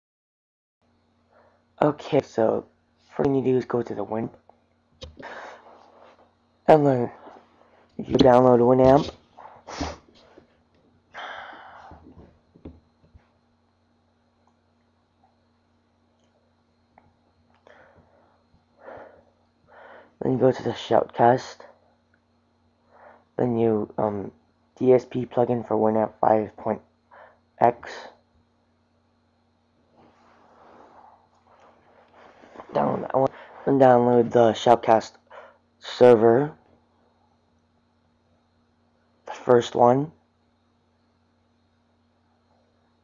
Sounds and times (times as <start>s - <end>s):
Speech: 1.8s - 4.4s, 6.7s - 7.2s, 8.0s - 9.1s, 20.2s - 21.7s, 23.4s - 26.8s, 27.6s - 28.2s, 32.7s - 35.2s, 35.8s - 36.6s, 39.3s - 40.2s.